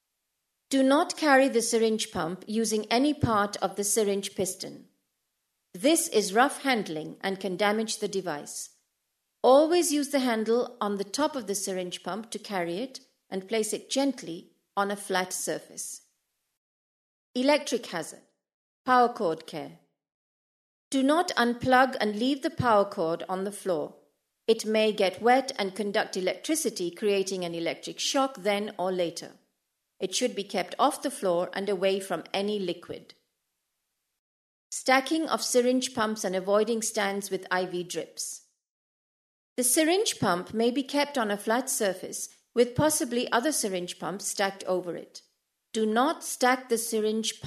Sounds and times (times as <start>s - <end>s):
Speech: 0.7s - 4.9s, 5.8s - 8.7s, 9.5s - 16.0s, 17.4s - 18.2s, 18.9s - 19.8s, 21.0s - 29.4s, 30.0s - 33.1s, 34.8s - 38.4s, 39.6s - 45.2s, 45.8s - 47.4s.